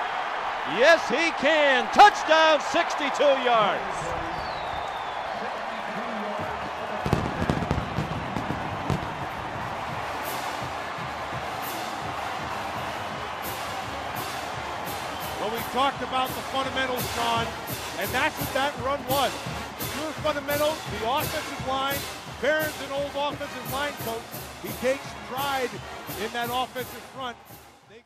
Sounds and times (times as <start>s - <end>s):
Music: 4.1s - 28.0s
Speech: 15.4s - 19.3s, 19.9s - 28.0s.